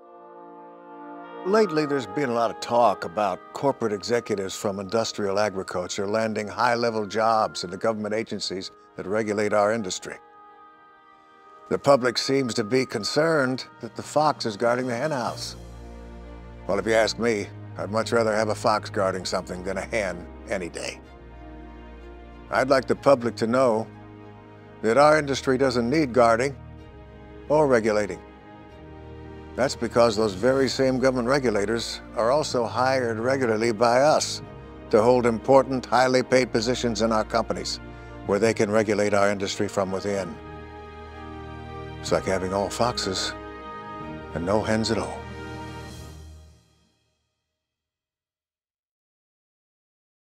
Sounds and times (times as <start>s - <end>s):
Music: 0.0s - 47.8s
Speech: 1.5s - 10.2s, 11.7s - 15.6s, 16.7s - 21.0s, 22.5s - 23.9s, 24.8s - 26.6s, 27.5s - 28.2s, 29.6s - 40.4s, 42.0s - 43.4s, 44.4s - 45.2s.